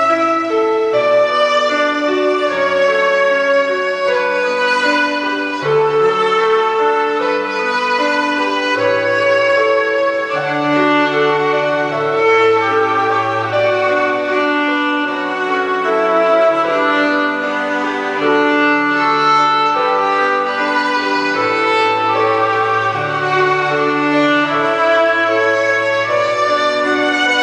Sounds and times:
Violin, fiddle: 0.0 - 27.4.

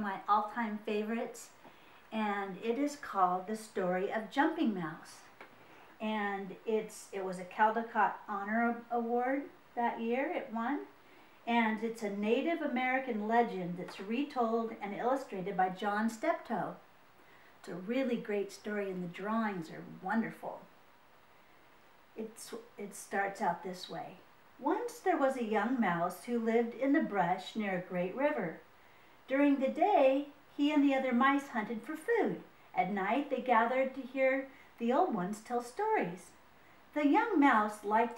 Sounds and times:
Speech: 0.0 - 5.4, 6.0 - 10.9, 11.5 - 16.8, 17.6 - 20.7, 22.2 - 28.6, 29.3 - 38.1.

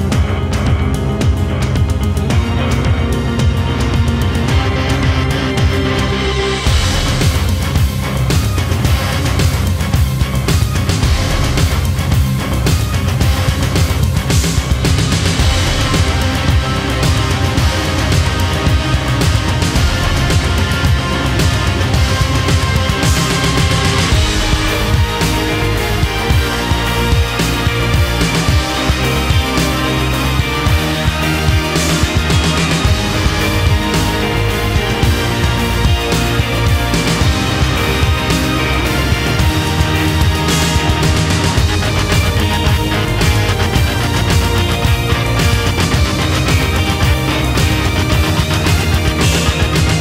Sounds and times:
Soundtrack music: 0.0 - 50.0
Theme music: 0.0 - 50.0.

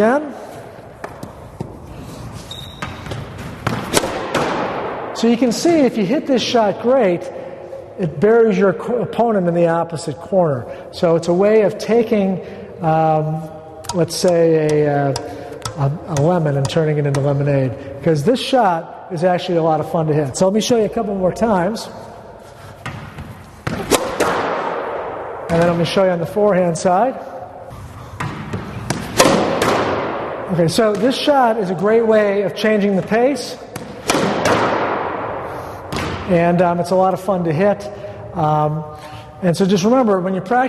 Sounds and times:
Speech: 0.0 - 0.4, 5.2 - 7.3, 8.0 - 22.0, 25.5 - 27.2, 30.5 - 33.6, 36.3 - 40.6.

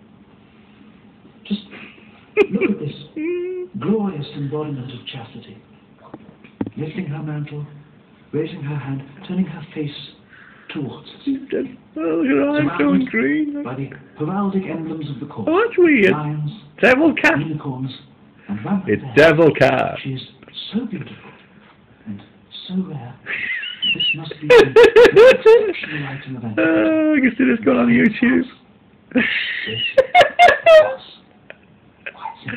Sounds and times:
Speech: 2.5 - 5.7, 6.8 - 21.4, 25.7 - 28.6.

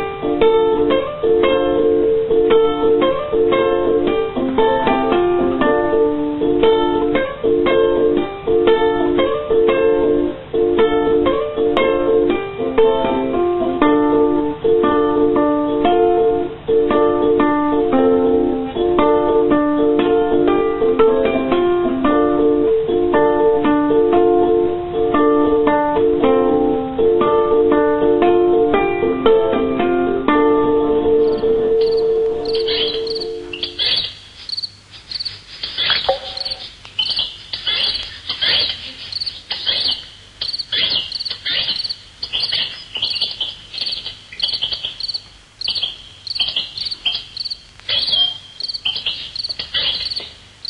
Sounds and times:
Cricket: 31.2 - 50.7.

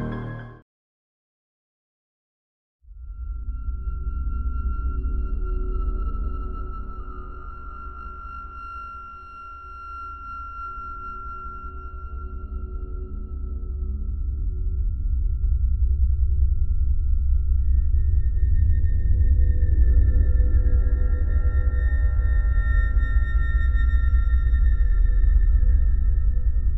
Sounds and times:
Music: 0.0 - 0.6, 2.9 - 26.7.

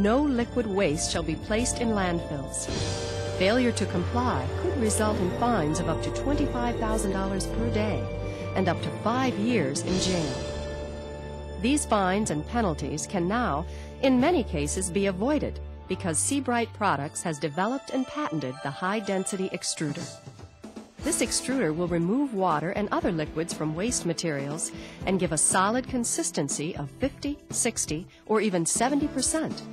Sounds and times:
Speech: 0.0 - 2.7, 3.4 - 10.4, 11.6 - 20.2, 21.0 - 29.7
Music: 0.0 - 29.7.

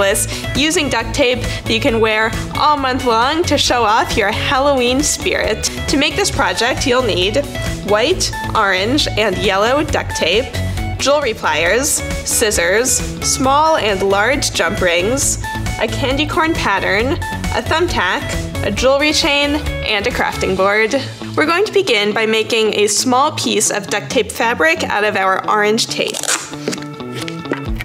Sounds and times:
Speech: 0.0 - 26.2
Music: 0.0 - 27.8.

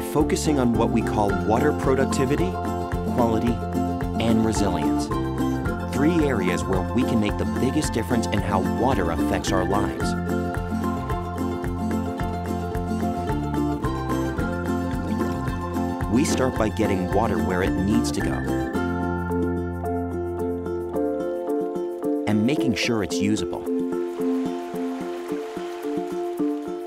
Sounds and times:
Speech: 0.0 - 2.6, 3.2 - 3.6, 4.2 - 5.1, 5.9 - 10.2, 16.1 - 18.5, 22.3 - 23.7
Music: 0.0 - 26.8.

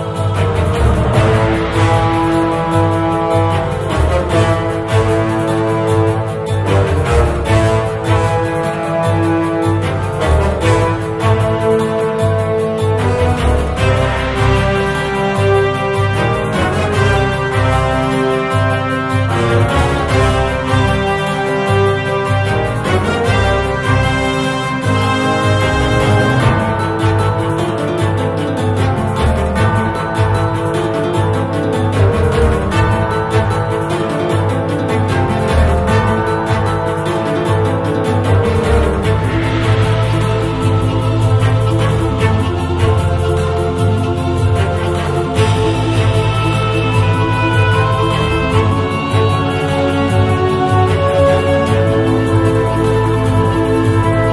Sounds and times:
Background music: 0.0 - 54.3.

